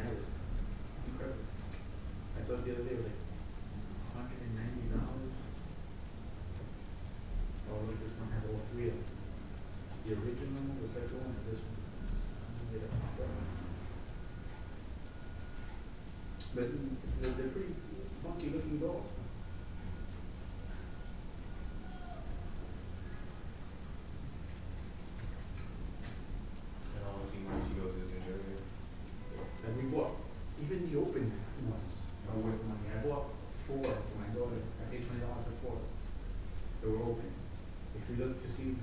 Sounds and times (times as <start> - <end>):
Speech: 0.0 - 0.4, 1.0 - 1.6, 2.3 - 5.6, 7.6 - 9.2, 10.0 - 13.8, 16.5 - 19.3, 26.9 - 36.0, 36.8 - 38.8.